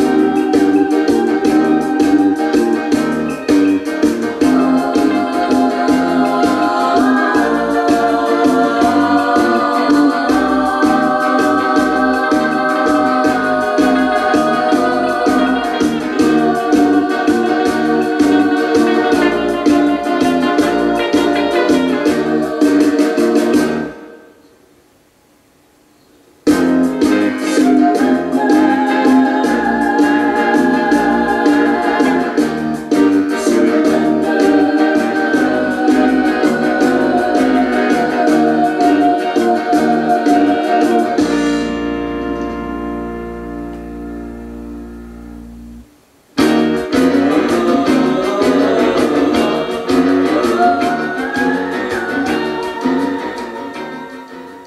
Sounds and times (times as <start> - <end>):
Music: 0.0 - 24.5, 26.4 - 54.6.